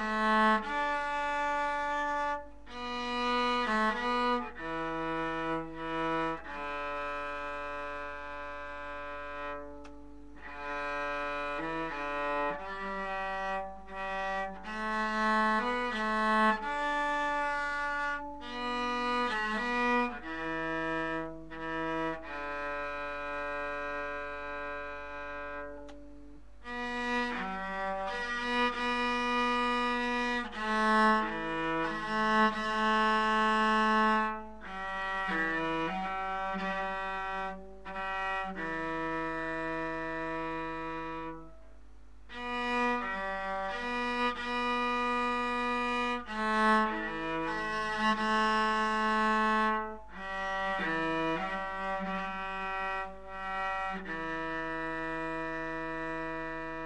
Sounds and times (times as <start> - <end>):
Cello: 0.0 - 56.8.